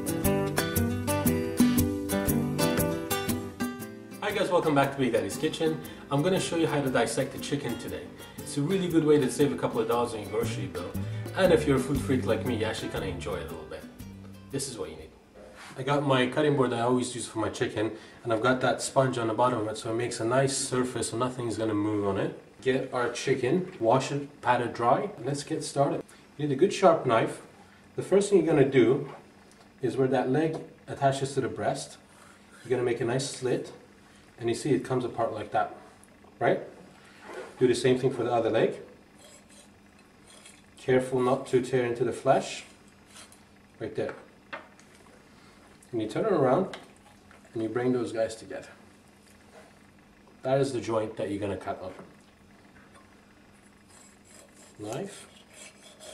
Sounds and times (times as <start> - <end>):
Speech: 4.2 - 13.9, 14.6 - 15.2, 15.8 - 29.2, 29.8 - 32.0, 32.6 - 36.8, 37.6 - 38.9, 40.8 - 42.7, 43.8 - 44.3, 45.9 - 46.8, 47.5 - 48.8, 50.4 - 52.1, 54.8 - 55.2.